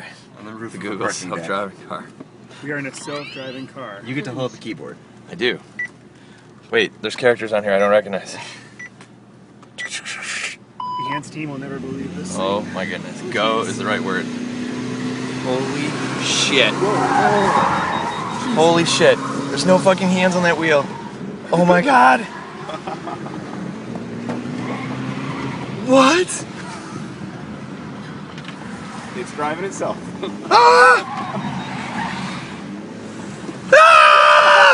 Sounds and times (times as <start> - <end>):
Car: 0.0 - 34.7.